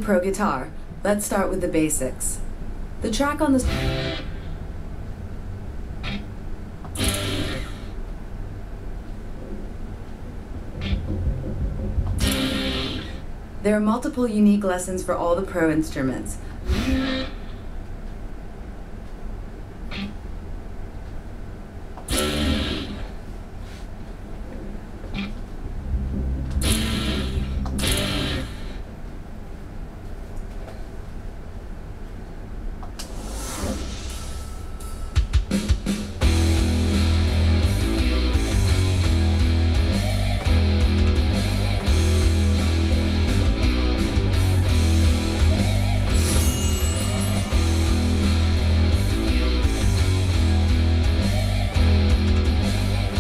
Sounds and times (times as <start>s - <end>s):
Strum: 3.6s - 4.5s, 10.6s - 13.3s, 22.1s - 23.2s, 25.2s - 28.8s, 33.2s - 53.2s
Electric guitar: 3.6s - 4.6s, 6.9s - 8.0s, 10.8s - 13.3s, 22.1s - 23.2s, 26.1s - 28.8s, 35.6s - 46.3s, 47.2s - 53.2s.